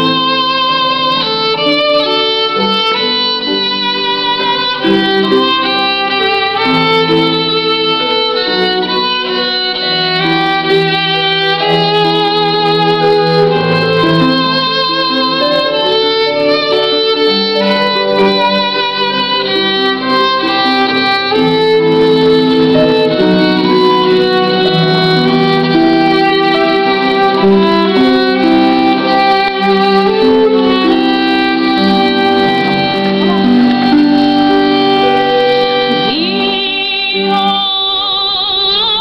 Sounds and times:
Violin, fiddle: 0.0s - 39.0s.

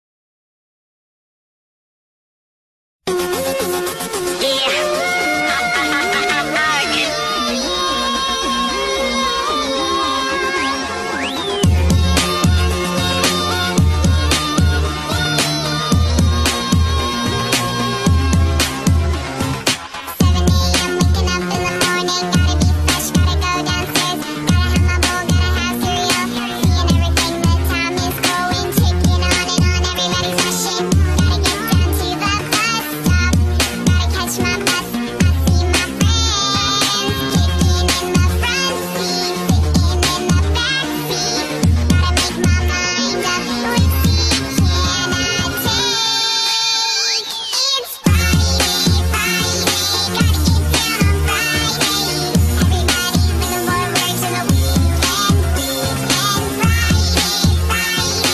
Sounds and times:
Music: 3.1s - 58.3s.

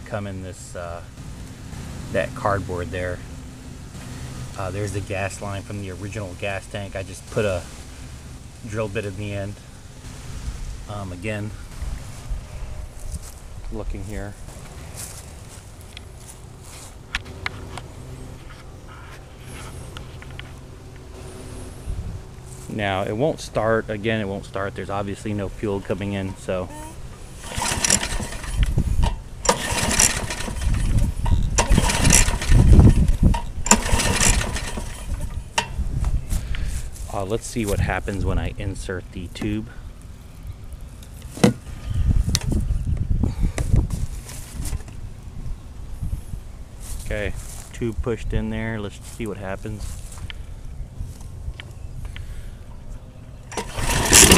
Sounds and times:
Speech: 0.0s - 1.1s, 2.1s - 3.2s, 4.6s - 7.7s, 8.6s - 9.6s, 10.9s - 11.6s, 13.7s - 14.4s, 22.6s - 27.0s, 37.0s - 39.8s, 47.0s - 50.0s
Lawn mower: 1.1s - 5.6s, 14.4s - 18.8s, 19.4s - 22.7s, 26.2s - 35.8s, 53.4s - 54.3s.

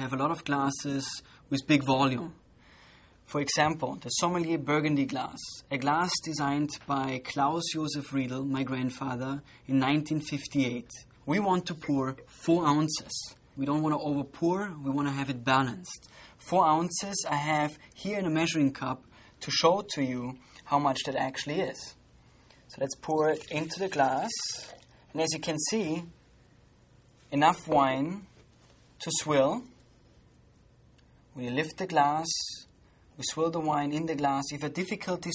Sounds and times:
Speech: 0.0s - 2.4s, 3.3s - 22.0s, 22.7s - 26.2s, 27.3s - 28.4s, 29.0s - 29.8s, 31.4s - 35.3s.

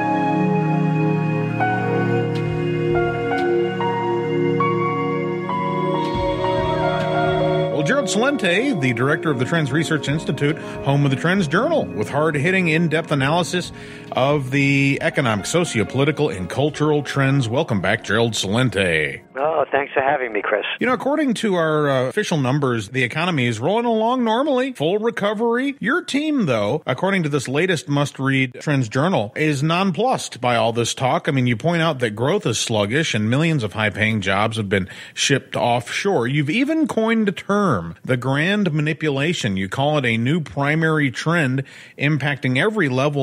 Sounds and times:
Speech: 7.8s - 43.2s.

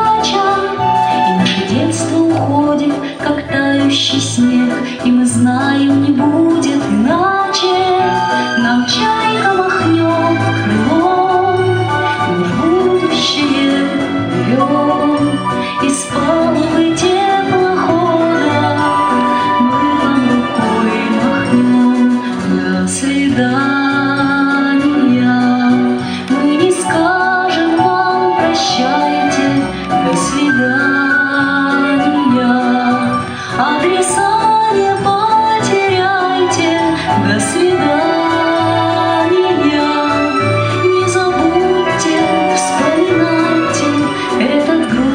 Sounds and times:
Music: 0.0s - 45.1s.

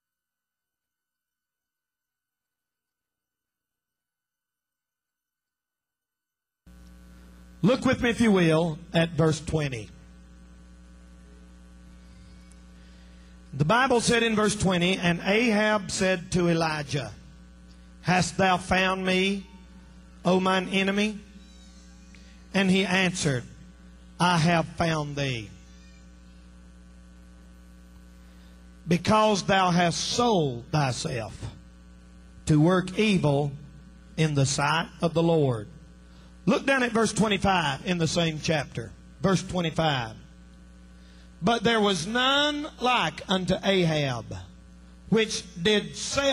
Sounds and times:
Speech: 7.6s - 10.0s, 13.6s - 17.2s, 18.0s - 19.6s, 20.2s - 21.3s, 22.5s - 23.5s, 24.2s - 25.6s, 28.9s - 31.6s, 32.5s - 33.6s, 34.2s - 35.8s, 36.4s - 40.3s, 41.4s - 46.3s.

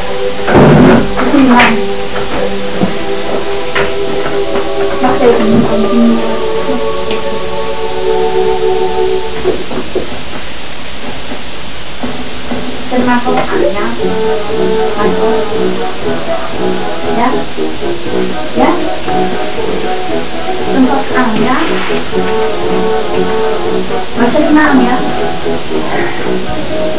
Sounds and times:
Music: 0.0s - 26.9s
Speech: 1.2s - 1.8s, 5.0s - 6.2s, 12.9s - 14.0s, 17.1s - 17.5s, 18.6s - 18.9s, 20.7s - 21.8s, 24.2s - 25.2s.

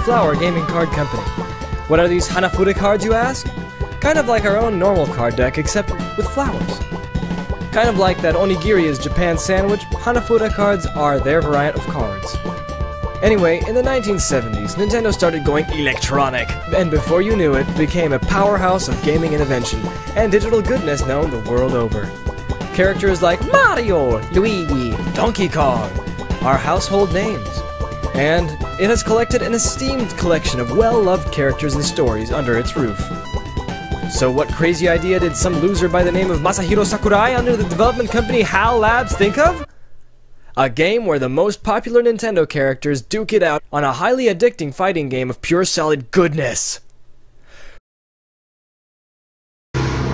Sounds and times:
Speech: 0.0s - 1.3s, 1.9s - 3.4s, 4.0s - 6.8s, 7.7s - 12.4s, 13.2s - 22.1s, 22.7s - 33.0s, 34.1s - 39.7s, 40.6s - 46.8s
Music: 0.0s - 39.7s, 49.8s - 50.1s.

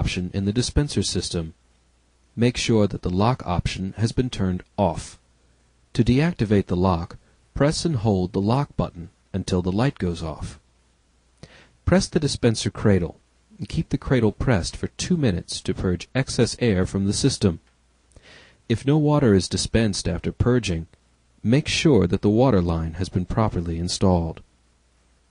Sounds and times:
Speech: 0.0s - 1.6s, 2.4s - 5.2s, 6.0s - 10.6s, 11.9s - 17.7s, 18.7s - 24.5s.

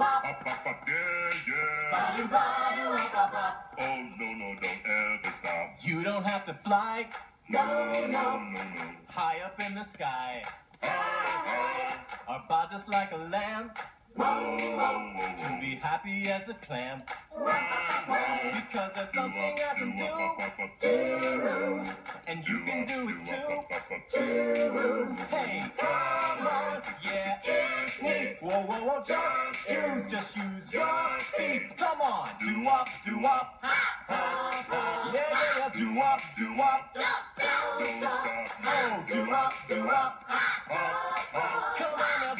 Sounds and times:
Music: 0.0s - 9.8s, 10.4s - 42.4s.

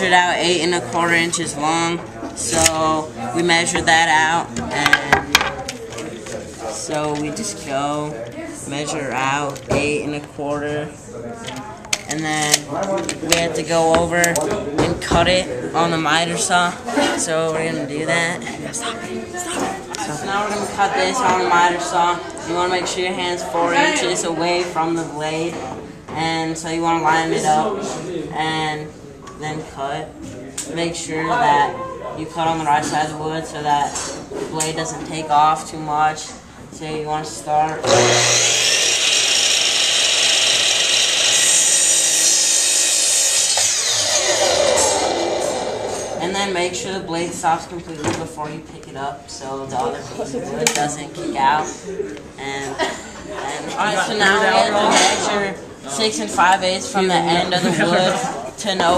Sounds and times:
Speech: 0.0s - 37.9s, 46.2s - 58.9s.

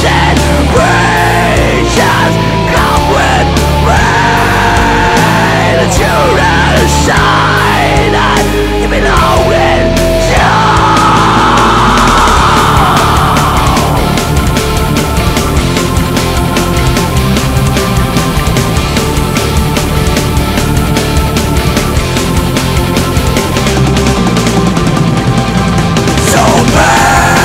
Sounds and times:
Singing: 0.0s - 14.2s, 26.2s - 27.4s
Heavy metal: 0.0s - 27.4s.

